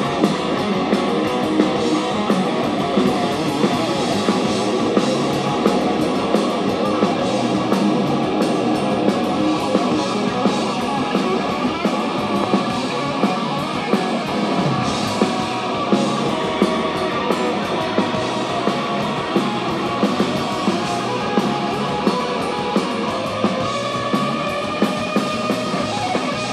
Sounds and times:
Bass guitar: 0.0 - 26.5.

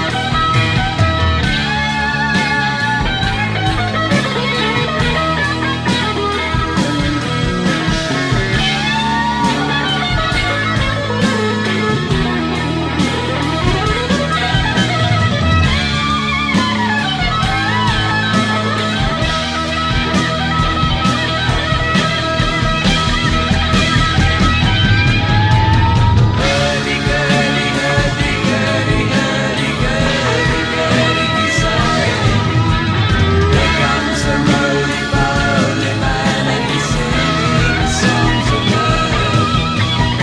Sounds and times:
Psychedelic rock: 0.0 - 40.2.

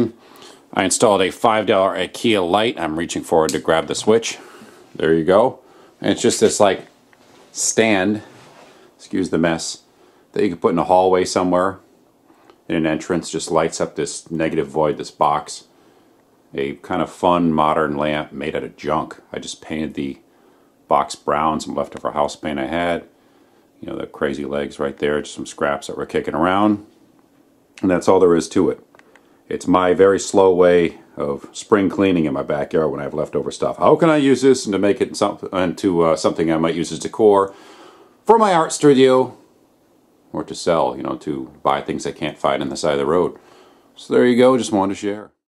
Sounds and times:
Speech: 0.0 - 8.4, 9.0 - 11.9, 12.6 - 15.8, 16.5 - 20.3, 20.9 - 23.2, 23.8 - 27.0, 27.8 - 28.9, 29.5 - 37.6, 38.2 - 39.5, 40.3 - 43.4, 44.0 - 45.4.

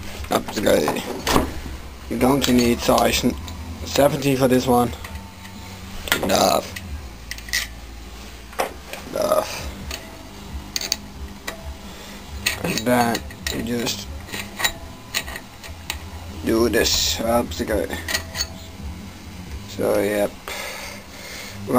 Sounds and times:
Speech: 0.3 - 1.1, 2.1 - 5.0, 12.6 - 14.1, 16.4 - 18.0, 19.7 - 20.4.

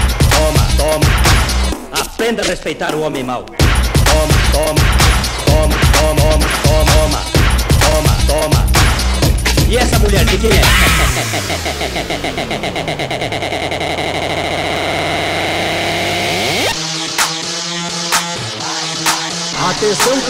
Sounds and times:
Music: 0.0 - 20.3
Speech: 2.0 - 3.4, 9.7 - 10.8, 19.6 - 20.3.

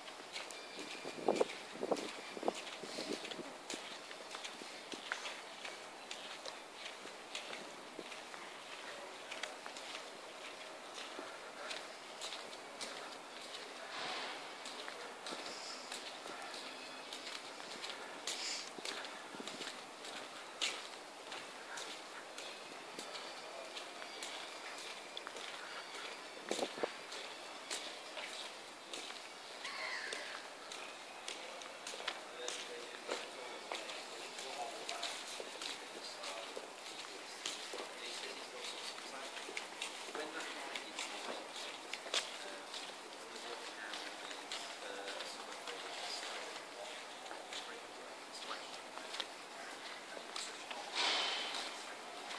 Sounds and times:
Walk, footsteps: 0.0 - 52.3.

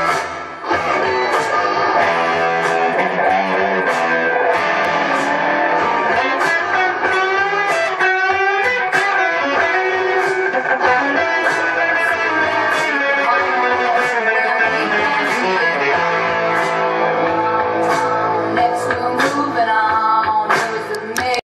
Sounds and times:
Electric guitar: 0.0 - 21.4.

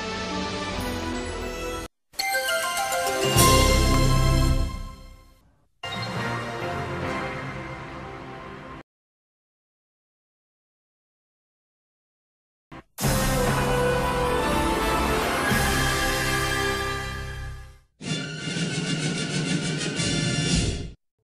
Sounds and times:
Music: 0.0 - 8.8, 12.8 - 21.0.

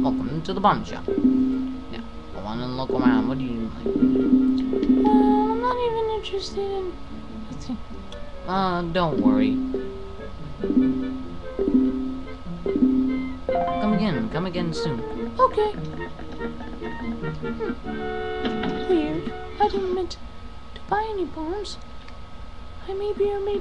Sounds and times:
Speech: 0.0 - 1.1, 1.9 - 3.8, 8.5 - 9.6, 13.8 - 15.8, 20.8 - 21.8, 22.8 - 23.6
Music: 0.8 - 20.1.

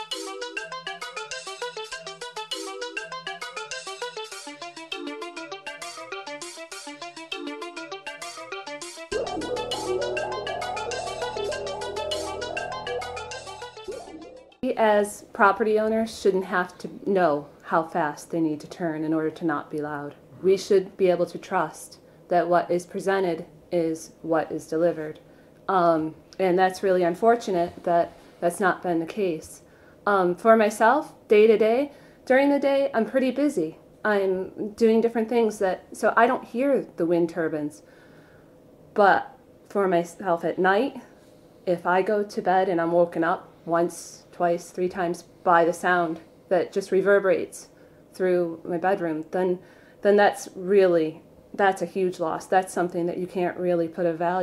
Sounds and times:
Speech: 14.6 - 37.8, 39.0 - 41.1, 41.7 - 54.4.

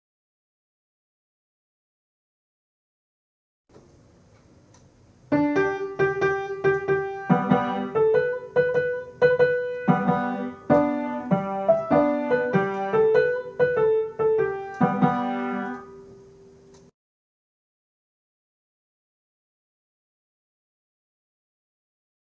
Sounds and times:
Music: 5.3 - 16.1.

